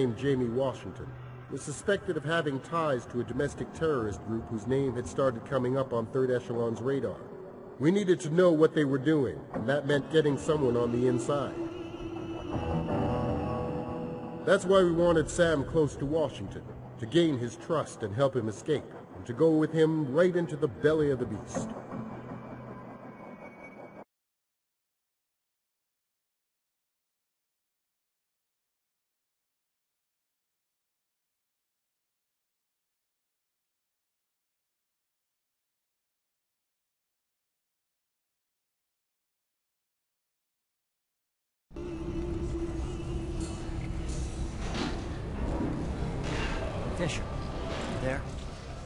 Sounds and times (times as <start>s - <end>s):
Speech: 0.0s - 11.6s, 14.5s - 21.7s, 46.9s - 47.3s, 48.0s - 48.3s
Music: 0.0s - 24.1s, 41.7s - 48.8s.